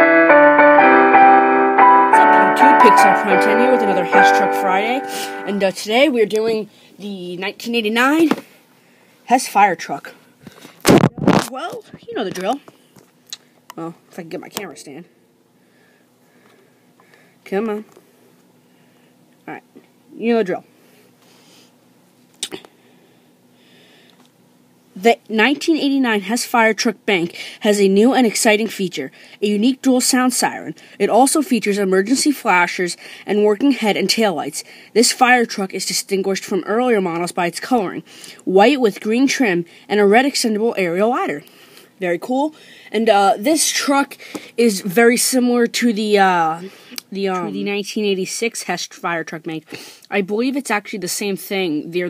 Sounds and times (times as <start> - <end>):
Speech: 2.2 - 8.4, 9.3 - 10.2, 11.1 - 12.7, 13.8 - 15.1, 17.4 - 17.9, 19.4 - 20.7, 25.0 - 41.4, 42.0 - 52.0.